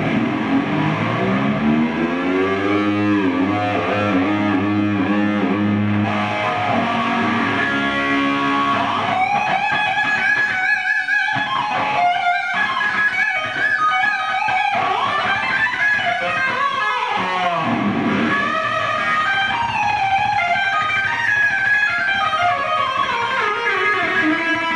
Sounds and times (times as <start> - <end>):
Music: 0.0 - 24.7.